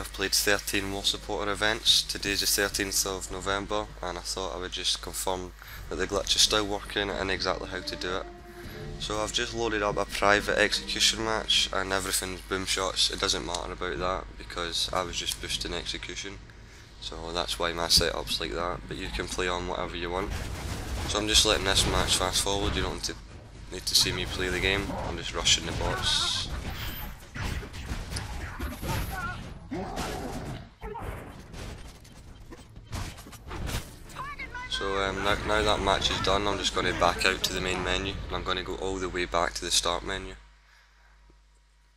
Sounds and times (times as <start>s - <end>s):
Speech: 0.0s - 8.3s, 9.0s - 16.4s, 17.0s - 20.3s, 21.1s - 23.2s, 23.8s - 26.5s, 34.2s - 40.4s.